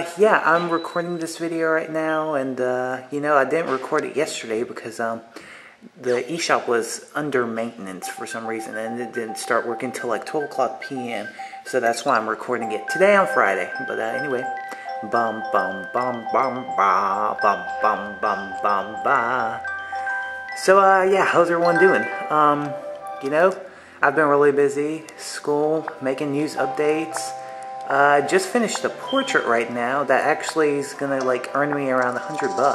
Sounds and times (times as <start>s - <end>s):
Speech: 0.0s - 19.7s, 20.6s - 32.7s
Glockenspiel: 0.3s - 2.1s, 7.9s - 32.7s.